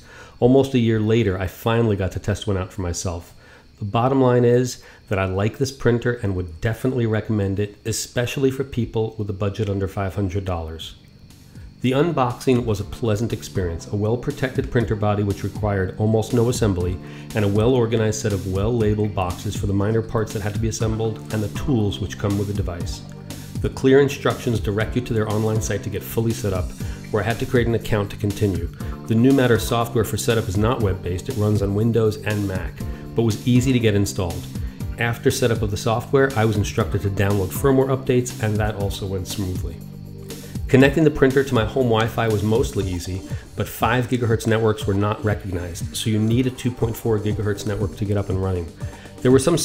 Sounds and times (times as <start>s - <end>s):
Music: 0.0s - 49.6s
Speech: 0.4s - 11.0s, 11.8s - 39.8s, 40.7s - 49.6s.